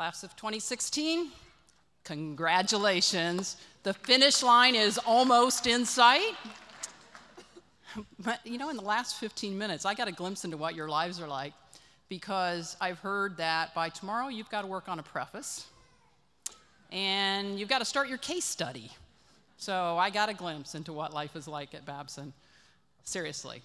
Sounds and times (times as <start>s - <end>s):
Female speech, woman speaking: 0.0s - 1.4s, 2.1s - 6.4s, 8.2s - 11.5s, 12.2s - 15.7s, 17.0s - 19.0s, 19.6s - 22.4s, 23.1s - 23.6s
Narration, monologue: 0.0s - 23.6s.